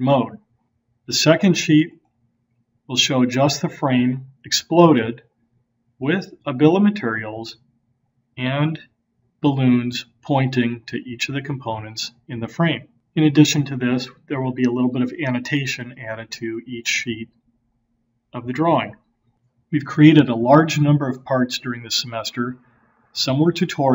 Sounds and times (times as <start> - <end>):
Speech: 0.0 - 0.4, 1.1 - 1.9, 2.9 - 5.2, 6.0 - 7.6, 8.4 - 8.8, 9.4 - 17.3, 18.4 - 19.0, 19.8 - 22.6, 23.2 - 23.9.